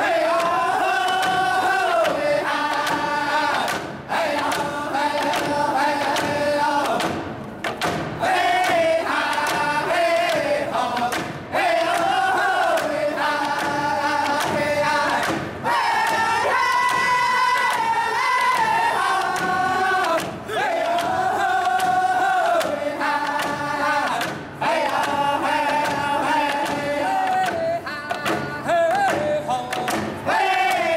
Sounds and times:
Choir: 0.0s - 30.9s
Male singing: 16.0s - 30.9s.

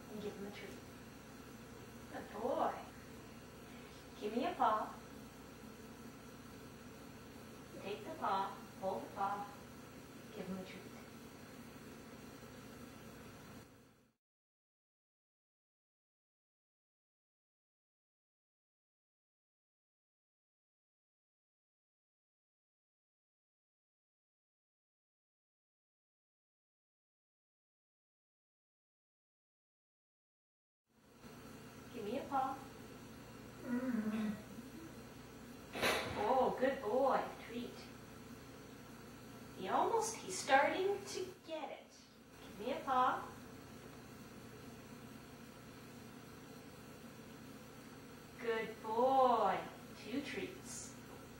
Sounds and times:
Speech: 0.0s - 0.8s, 2.1s - 3.0s, 4.2s - 5.0s, 7.8s - 9.6s, 10.3s - 11.0s, 31.9s - 32.7s, 36.2s - 38.0s, 39.6s - 43.4s, 48.4s - 51.0s.

